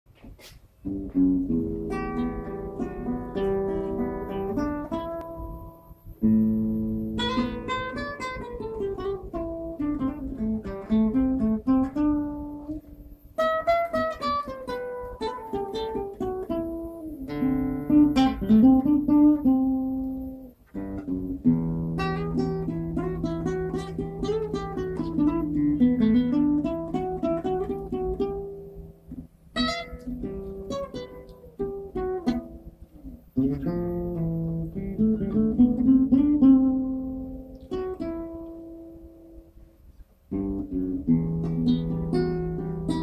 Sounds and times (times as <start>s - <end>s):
Acoustic guitar: 0.1s - 43.0s.